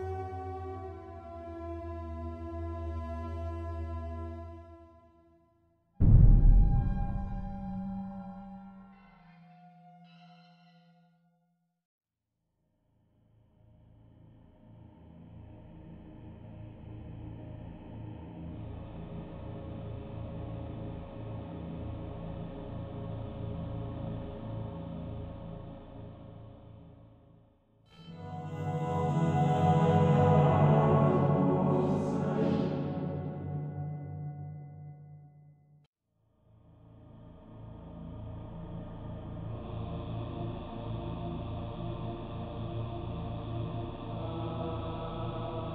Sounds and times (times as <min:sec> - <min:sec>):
Mantra: 0:28.0 - 0:33.8, 0:38.3 - 0:45.7.